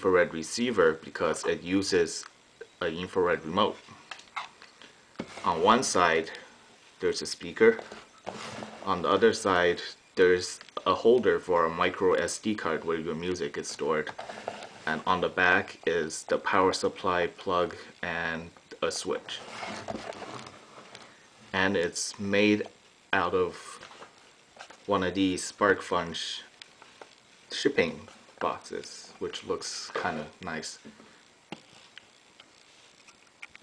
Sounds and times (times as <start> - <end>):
Speech: 0.0 - 3.9, 5.4 - 7.9, 8.8 - 14.2, 14.9 - 19.5, 21.5 - 23.9, 24.9 - 26.5, 27.5 - 30.9.